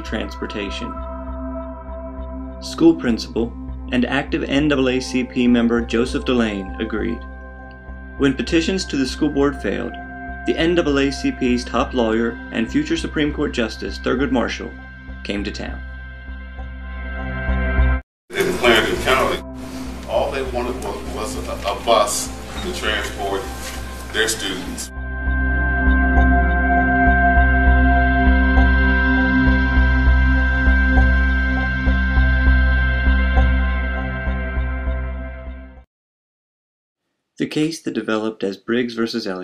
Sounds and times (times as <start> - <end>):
Background music: 0.0 - 35.8.